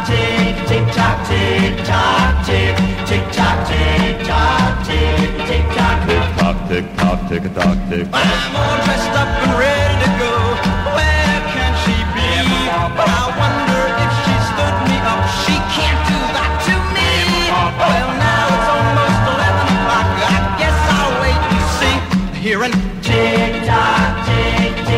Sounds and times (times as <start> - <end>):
Music: 0.0 - 24.9.